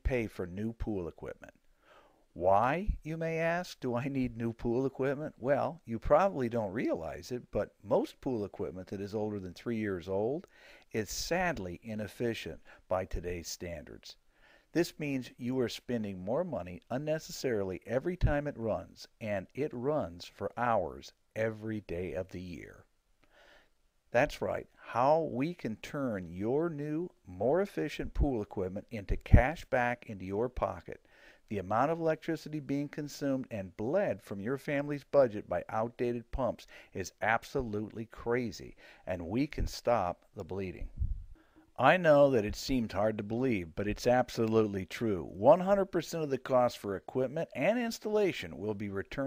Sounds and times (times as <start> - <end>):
Speech: 0.0 - 1.6, 2.4 - 14.2, 14.8 - 22.9, 24.2 - 41.0, 41.8 - 49.2.